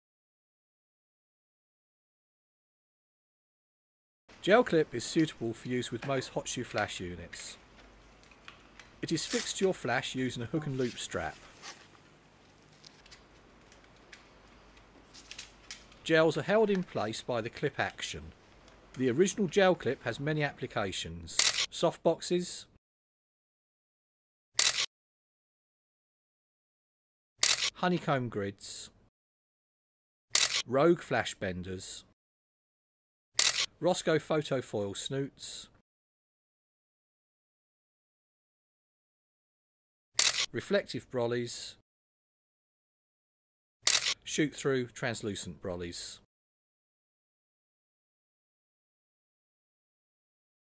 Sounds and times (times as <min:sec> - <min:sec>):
Speech: 0:04.4 - 0:07.6, 0:09.0 - 0:11.5, 0:16.0 - 0:18.4, 0:19.0 - 0:22.8, 0:27.8 - 0:29.0, 0:30.7 - 0:32.2, 0:33.8 - 0:35.8, 0:40.6 - 0:41.8, 0:44.3 - 0:46.3
Single-lens reflex camera: 0:21.4 - 0:21.7, 0:24.6 - 0:24.9, 0:27.4 - 0:27.8, 0:30.3 - 0:30.7, 0:33.4 - 0:33.7, 0:40.2 - 0:40.5, 0:43.8 - 0:44.2.